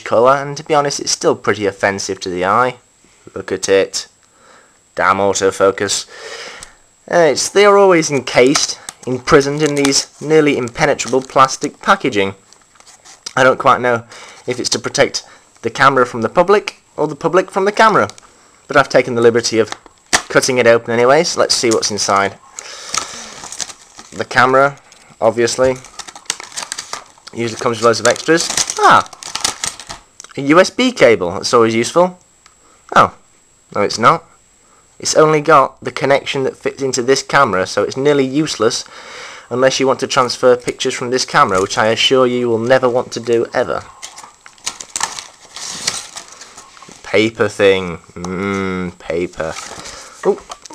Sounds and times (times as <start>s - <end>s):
Speech: 0.0s - 4.2s, 5.0s - 6.1s, 7.1s - 12.4s, 13.3s - 22.4s, 24.1s - 25.9s, 27.3s - 29.2s, 30.2s - 32.2s, 32.9s - 34.3s, 35.0s - 38.9s, 39.5s - 43.9s, 47.0s - 49.6s, 50.2s - 50.7s.